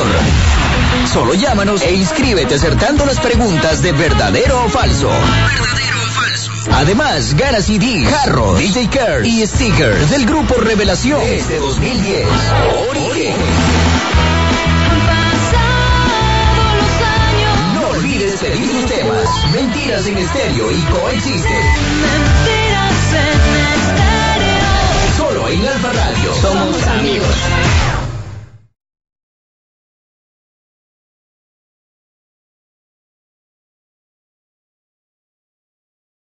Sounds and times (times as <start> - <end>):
Radio: 0.0 - 14.1, 16.6 - 28.1
Music: 0.0 - 28.2
Speech: 1.1 - 13.5, 17.6 - 21.8, 25.1 - 27.5.